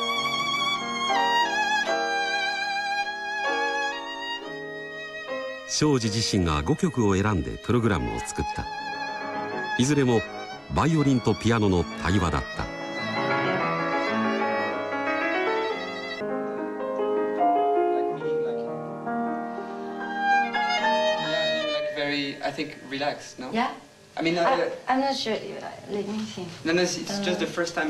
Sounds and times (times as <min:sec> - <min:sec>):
Sad music: 0:00.0 - 0:23.4.